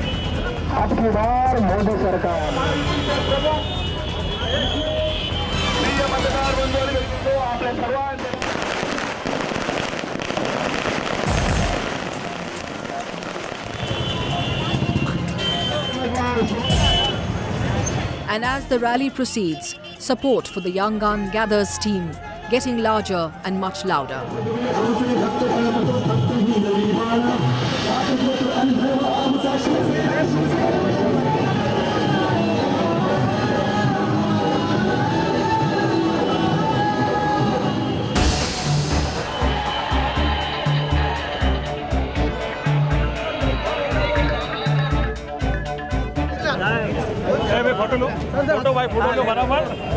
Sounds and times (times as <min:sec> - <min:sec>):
Music: 0:00.0 - 0:07.7, 0:11.0 - 0:49.9
Outside, urban or manmade: 0:00.0 - 0:49.9
Firecracker: 0:05.5 - 0:15.6, 0:37.9 - 0:40.1.